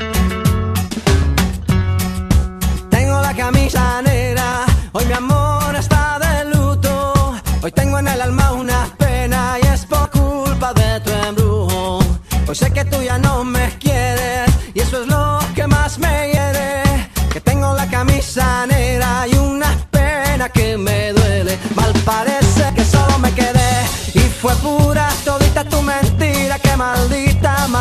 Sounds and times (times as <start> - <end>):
Music of Africa: 0.0 - 27.8.